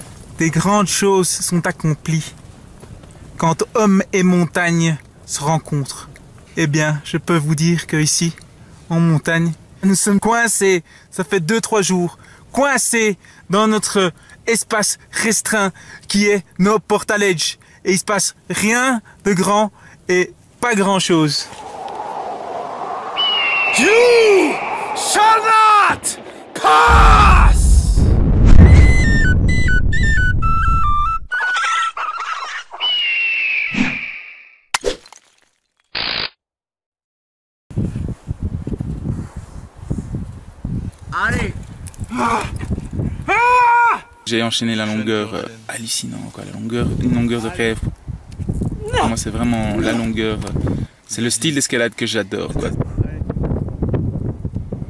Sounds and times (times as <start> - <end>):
Outside, rural or natural: 0.0 - 36.4, 37.7 - 54.8.